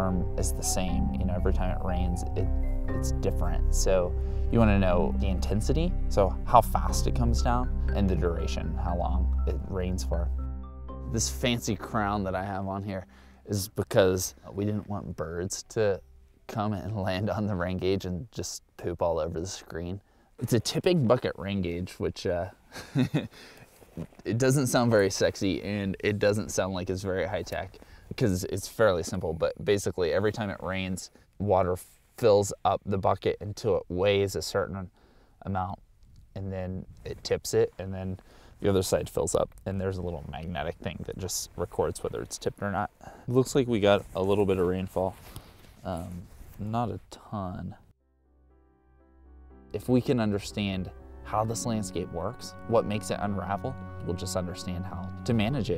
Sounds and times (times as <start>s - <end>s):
Speech: 0.0s - 10.3s, 11.1s - 22.6s, 24.0s - 35.8s, 36.4s - 45.2s, 45.8s - 47.9s, 49.8s - 55.7s
Music: 0.0s - 18.0s, 48.0s - 55.7s.